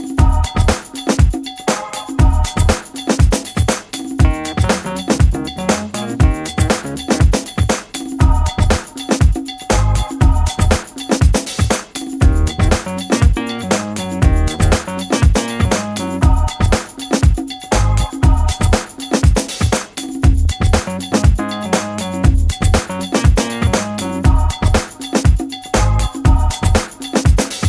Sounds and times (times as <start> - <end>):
Music: 0.0 - 27.6.